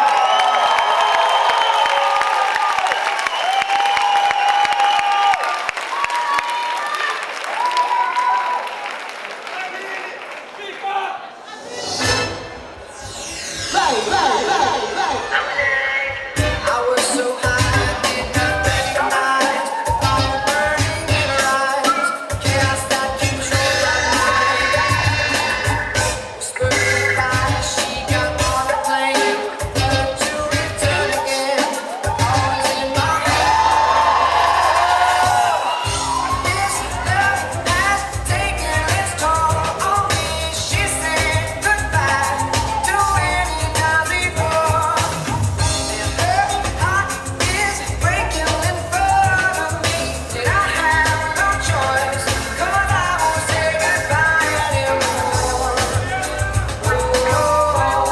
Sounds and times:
Inside, large room or hall: 0:00.0 - 0:58.1
Music: 0:11.7 - 0:58.1.

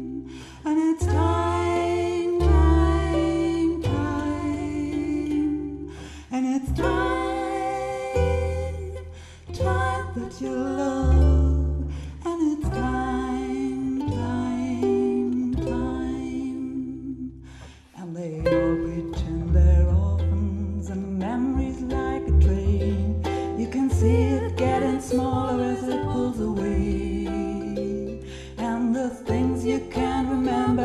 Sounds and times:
Cello: 0:00.0 - 0:30.8
Double bass: 0:00.0 - 0:30.8
Pizzicato: 0:00.0 - 0:30.8.

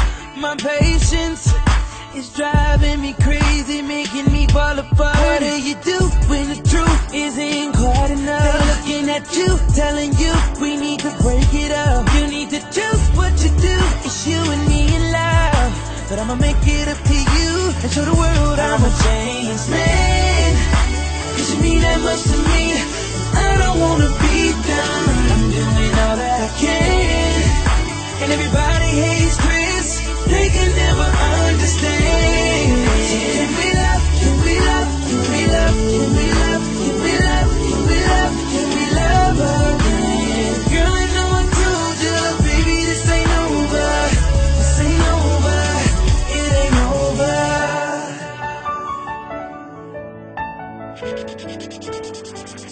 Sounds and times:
Music: 0:00.0 - 0:52.7.

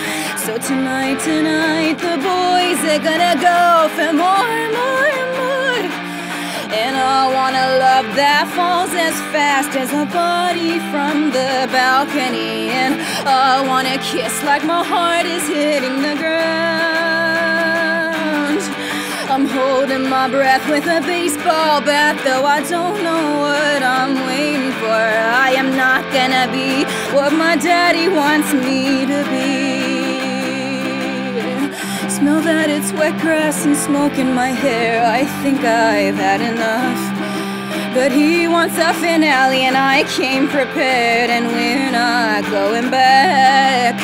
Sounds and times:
Music: 0:00.0 - 0:44.0.

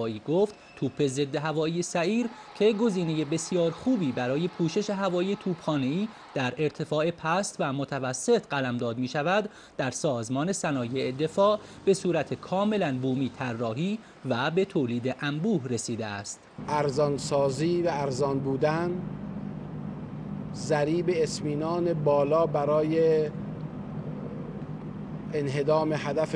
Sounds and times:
Speech: 0:00.0 - 0:19.1, 0:20.6 - 0:23.4, 0:25.3 - 0:26.3
Inside, large room or hall: 0:00.0 - 0:26.3.

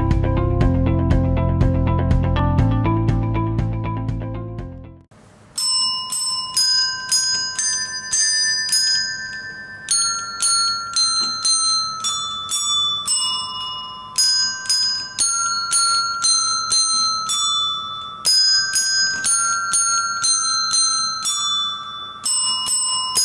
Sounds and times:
Bell: 0:05.6 - 0:23.2.

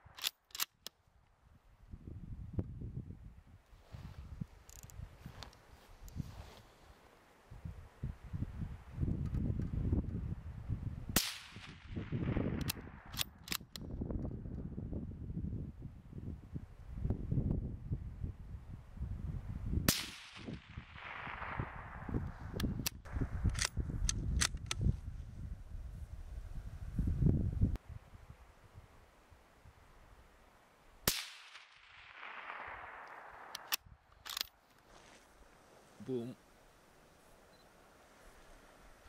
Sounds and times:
Gunshot, gunfire: 0:11.2 - 0:12.6, 0:19.9 - 0:21.8, 0:31.1 - 0:33.0.

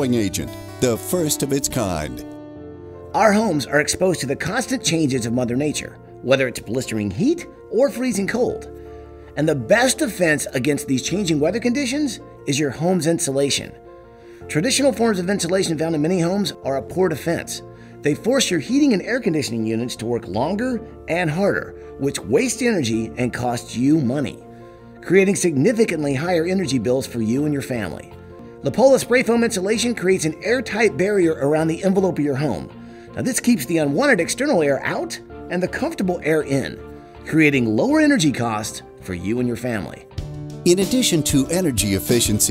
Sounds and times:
Speech: 0:00.0 - 0:02.2, 0:03.2 - 0:08.7, 0:09.4 - 0:13.7, 0:14.5 - 0:24.4, 0:25.0 - 0:28.0, 0:28.6 - 0:40.1, 0:40.7 - 0:42.5
Music: 0:00.0 - 0:42.5.

